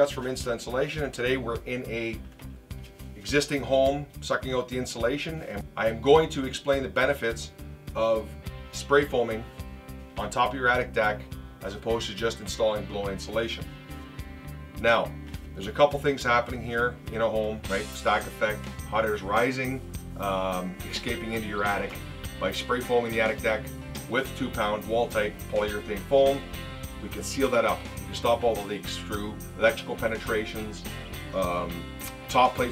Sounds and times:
Speech: 0.0s - 2.2s, 3.2s - 9.5s, 10.2s - 13.7s, 14.8s - 32.7s
Music: 0.0s - 32.7s.

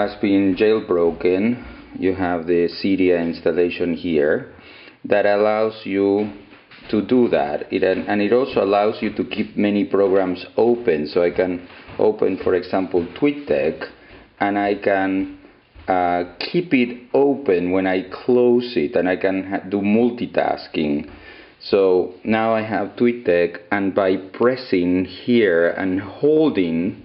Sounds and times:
Speech: 0.0s - 27.0s.

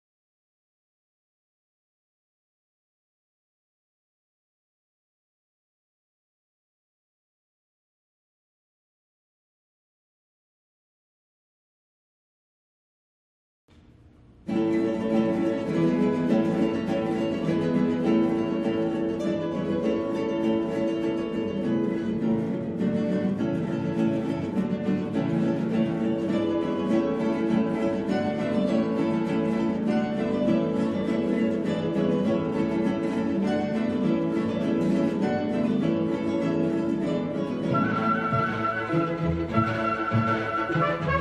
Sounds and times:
Strum: 13.7s - 41.2s.

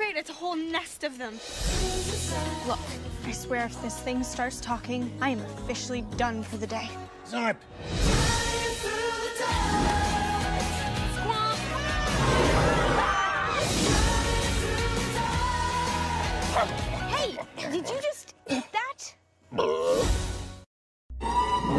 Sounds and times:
Music: 0.0s - 18.4s, 19.8s - 21.7s.

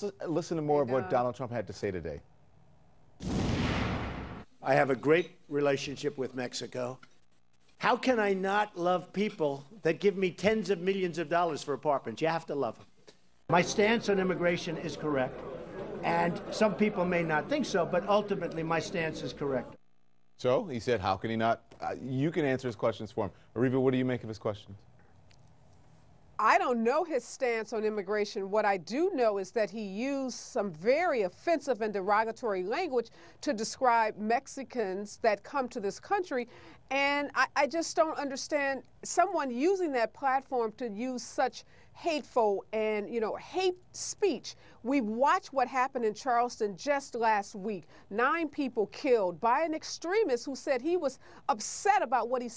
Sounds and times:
Male speech, man speaking: 0.0s - 2.3s, 4.6s - 7.0s, 7.8s - 12.9s, 13.5s - 15.4s, 16.0s - 19.8s, 20.4s - 24.8s
Narration, monologue: 0.0s - 52.5s.

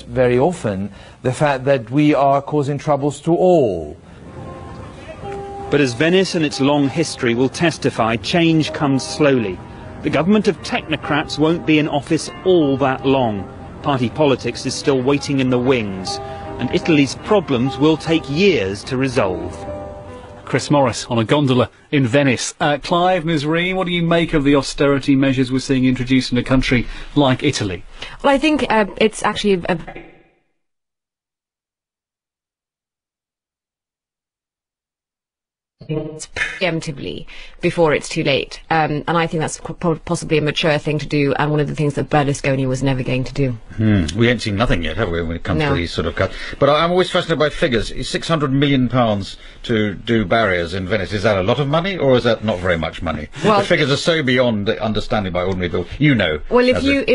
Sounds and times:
Music: 3.7s - 21.7s, 56.5s - 57.1s.

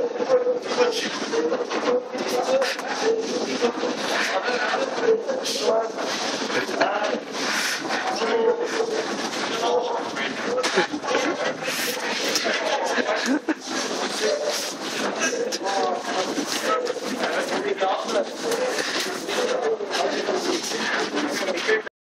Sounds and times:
Speech: 0.0s - 21.9s.

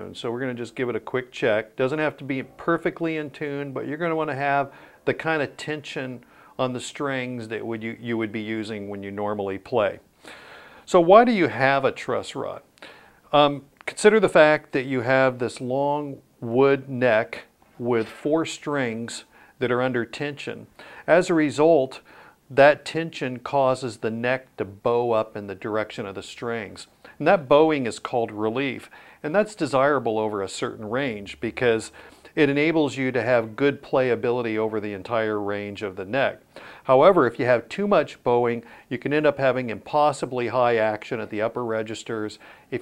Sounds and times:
Speech: 0.0s - 10.0s, 10.9s - 12.7s, 13.3s - 42.8s.

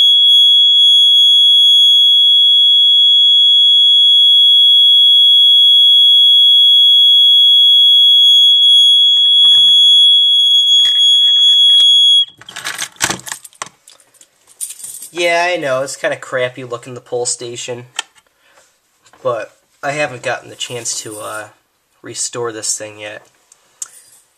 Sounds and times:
Fire alarm: 0.0s - 12.4s.

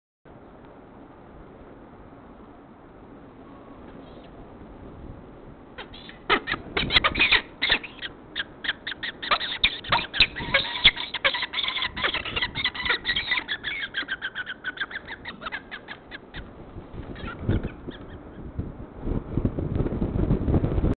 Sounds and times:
Bird: 5.8s - 18.5s.

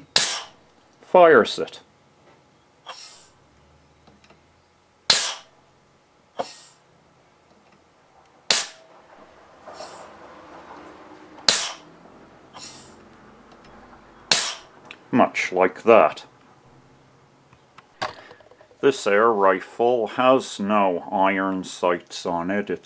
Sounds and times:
Cap gun: 5.1s - 5.4s, 8.5s - 8.8s.

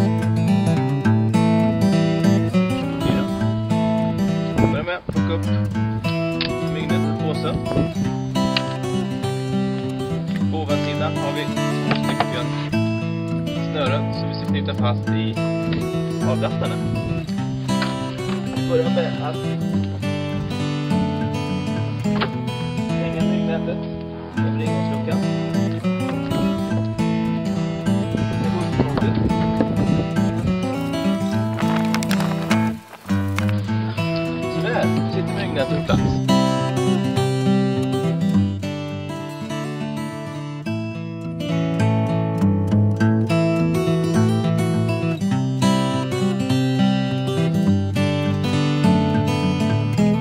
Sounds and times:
Music: 0.0s - 50.2s
Speech: 4.6s - 5.6s, 6.6s - 7.8s, 10.4s - 12.7s, 13.6s - 15.4s, 16.2s - 16.9s, 18.6s - 19.6s, 22.9s - 25.3s, 34.5s - 36.2s.

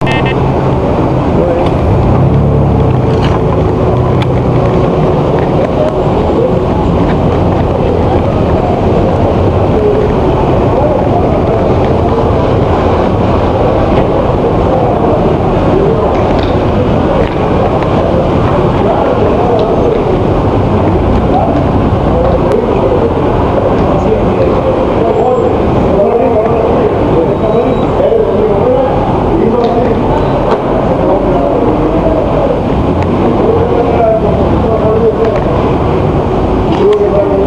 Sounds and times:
Speech: 0.0s - 0.4s, 1.3s - 1.9s, 4.0s - 37.4s.

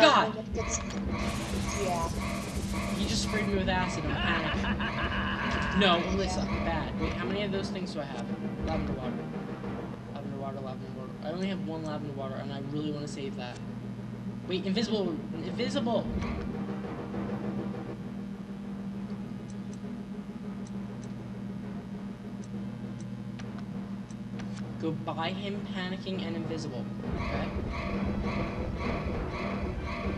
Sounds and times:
Speech: 1.7s - 2.2s, 3.0s - 4.6s, 5.7s - 9.2s, 10.2s - 13.6s, 14.5s - 16.1s, 24.8s - 27.5s.

